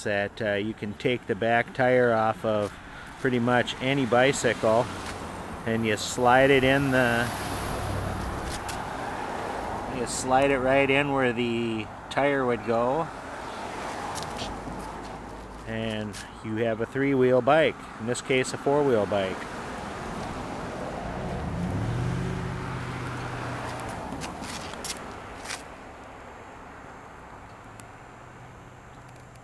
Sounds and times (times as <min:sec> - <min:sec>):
Speech: 0:00.0 - 0:04.9, 0:05.7 - 0:07.3, 0:09.9 - 0:13.1, 0:15.7 - 0:19.4
Vehicle: 0:00.0 - 0:29.4.